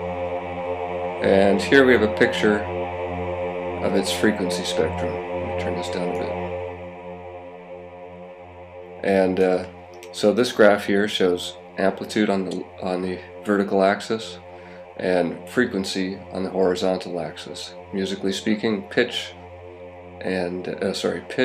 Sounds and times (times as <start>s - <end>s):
Speech: 1.2s - 2.7s, 3.8s - 6.4s, 9.0s - 14.4s, 15.0s - 19.4s, 20.2s - 21.4s.